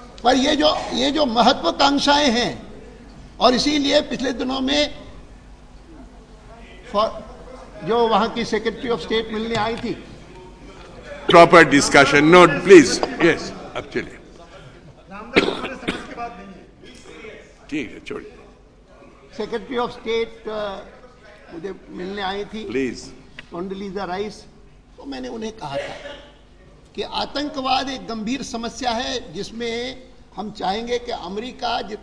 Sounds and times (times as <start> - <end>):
Male speech, man speaking: 0.0 - 5.2, 6.5 - 32.0
Conversation: 0.0 - 32.0
Narration, monologue: 0.0 - 32.0.